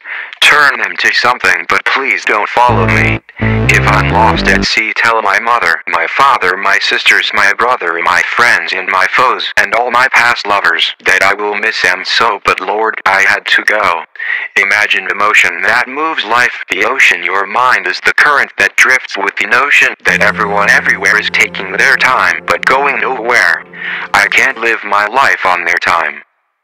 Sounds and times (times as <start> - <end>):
Speech: 0.0 - 26.2.